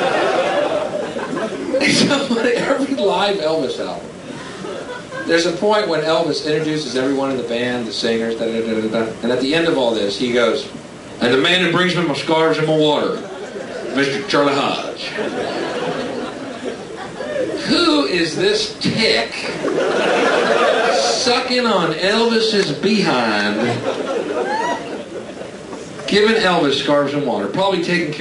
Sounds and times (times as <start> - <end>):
Speech: 1.8 - 4.1, 5.3 - 13.3, 13.9 - 15.3, 17.6 - 19.6, 20.8 - 23.9, 26.1 - 28.2.